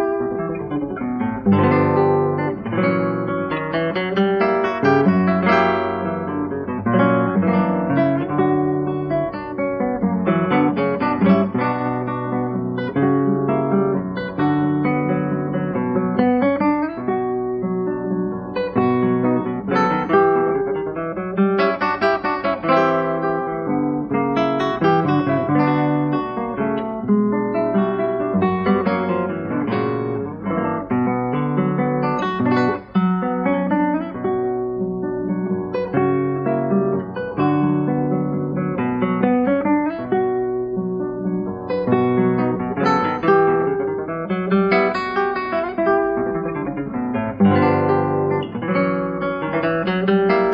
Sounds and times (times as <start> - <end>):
Music: 0.0 - 50.5.